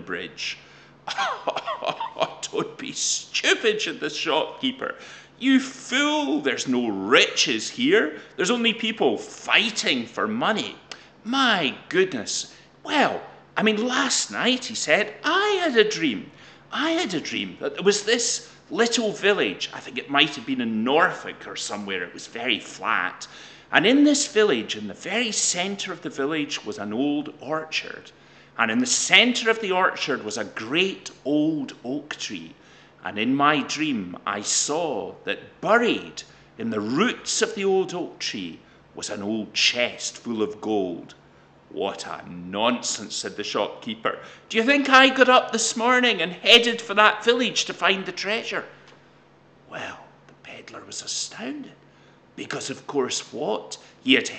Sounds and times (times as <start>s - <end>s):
Speech: 0.0s - 48.7s, 49.7s - 51.8s, 52.4s - 54.3s
Inside, small room: 0.0s - 54.3s.